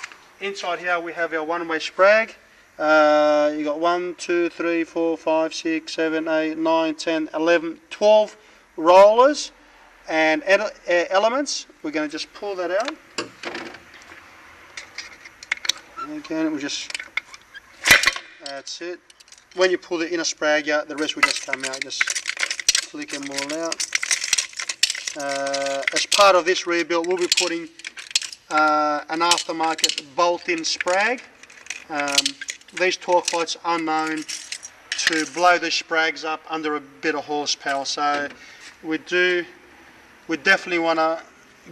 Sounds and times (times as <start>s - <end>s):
Speech: 0.4s - 13.0s, 16.0s - 16.9s, 18.4s - 19.0s, 19.6s - 22.1s, 22.8s - 23.8s, 25.2s - 27.7s, 28.5s - 31.3s, 31.9s - 34.3s, 35.0s - 39.5s, 40.3s - 41.7s.